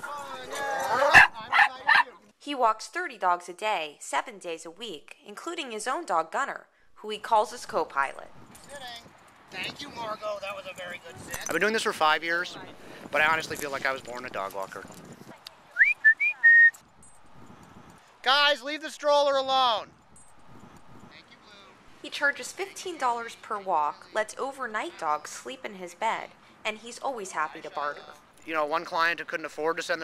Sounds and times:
Speech: 9.6s - 14.9s.

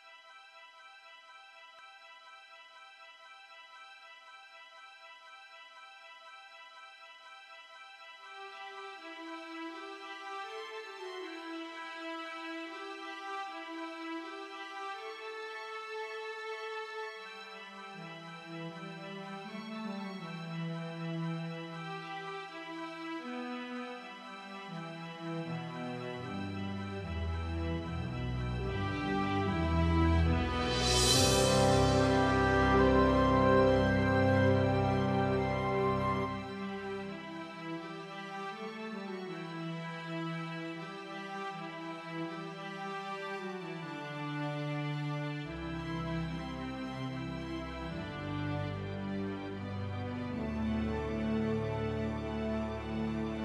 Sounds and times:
Music: 0.0s - 53.4s.

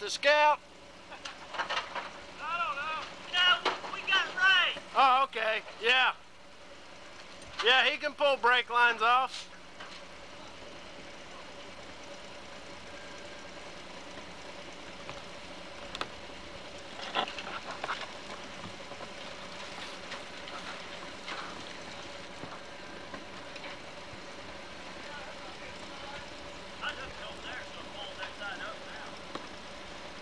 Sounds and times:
Vehicle: 0.0s - 30.2s.

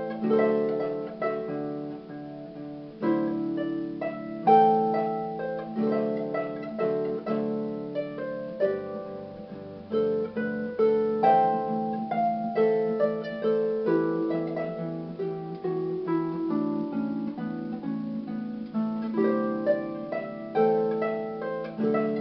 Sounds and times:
Musical instrument: 0.0s - 22.2s.

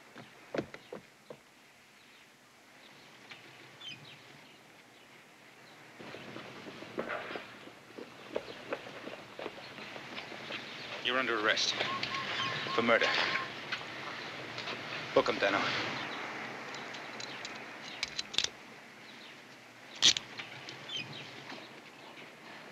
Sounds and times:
Speech: 11.0s - 11.8s, 12.7s - 13.2s, 15.1s - 15.8s.

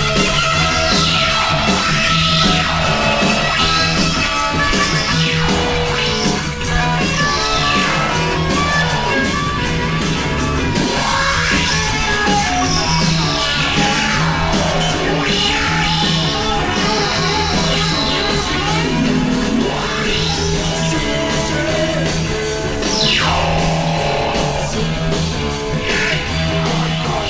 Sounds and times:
Progressive rock: 0.0s - 27.3s.

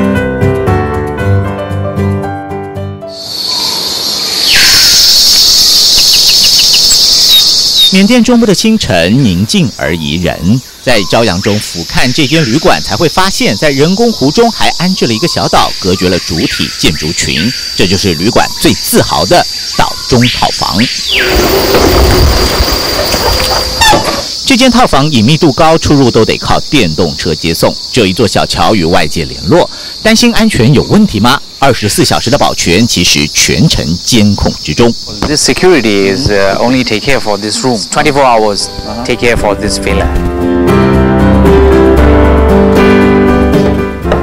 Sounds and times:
Chirp, tweet: 3.2s - 8.0s, 14.0s - 21.4s.

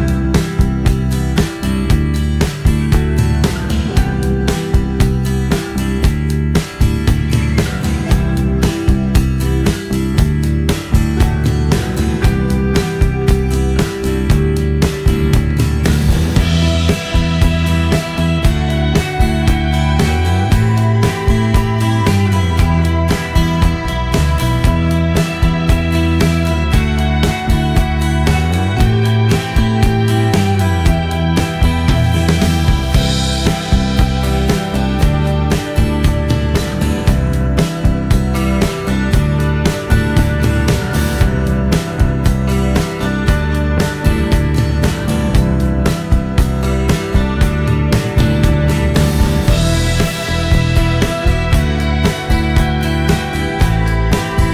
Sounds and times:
Music: 0.0s - 54.5s.

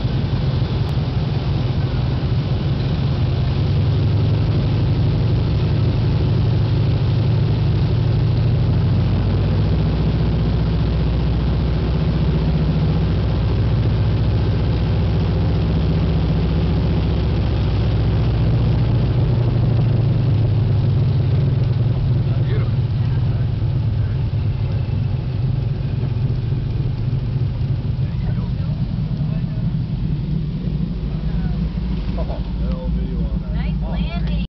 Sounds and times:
Speech: 22.3s - 24.2s, 28.0s - 29.7s, 32.2s - 34.4s.

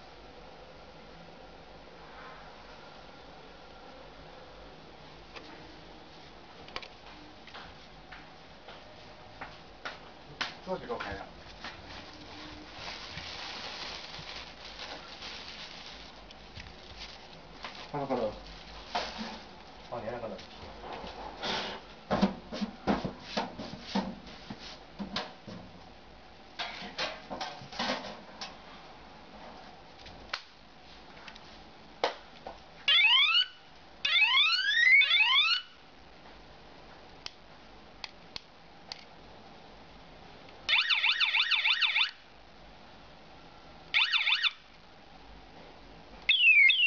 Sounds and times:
Speech: 10.6s - 11.4s, 17.9s - 18.4s, 19.9s - 20.5s.

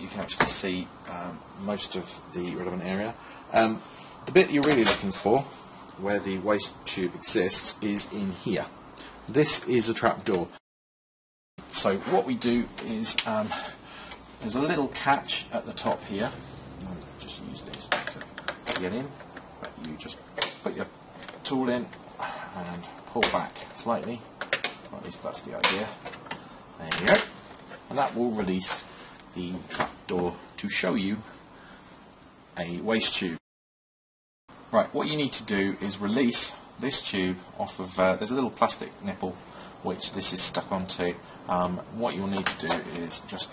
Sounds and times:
Speech: 0.0s - 10.6s, 11.7s - 13.7s, 14.4s - 24.3s, 24.9s - 26.0s, 26.8s - 27.3s, 27.9s - 31.3s, 32.6s - 33.4s, 34.7s - 43.5s.

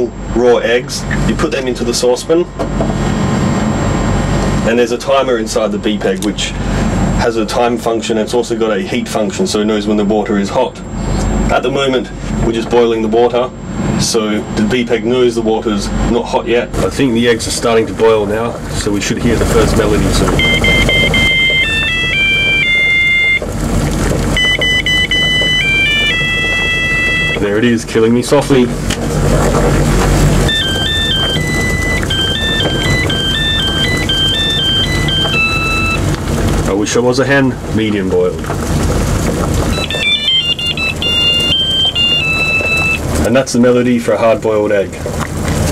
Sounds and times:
Speech: 0.0s - 2.6s, 4.6s - 6.6s, 7.2s - 10.9s, 11.5s - 20.4s, 27.4s - 28.8s, 36.7s - 38.4s, 43.2s - 45.1s.

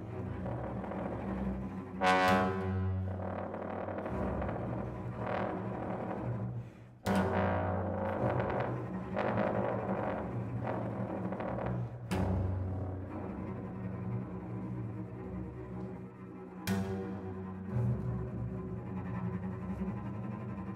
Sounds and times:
Cello: 0.0s - 20.7s
Double bass: 0.0s - 20.7s.

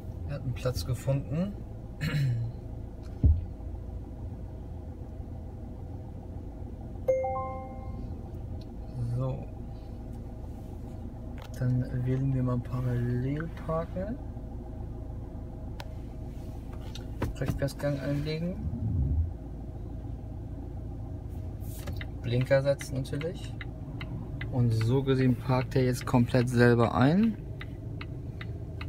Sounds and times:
Speech: 0.3s - 1.6s, 9.0s - 9.5s, 11.6s - 14.2s, 17.4s - 18.6s, 22.2s - 23.6s, 24.5s - 27.4s.

